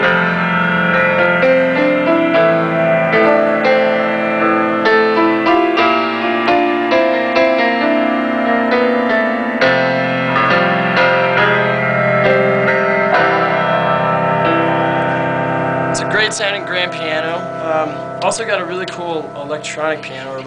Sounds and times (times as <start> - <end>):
Music: 0.0 - 20.4
Speech: 16.0 - 20.4.